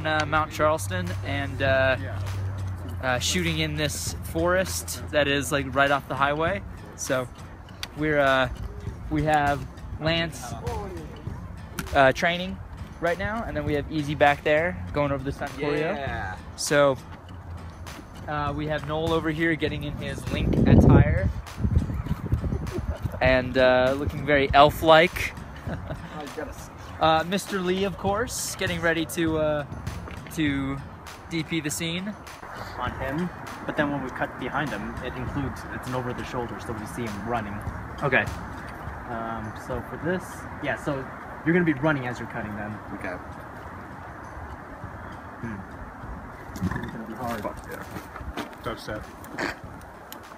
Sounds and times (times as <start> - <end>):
Music: 0.0 - 50.3.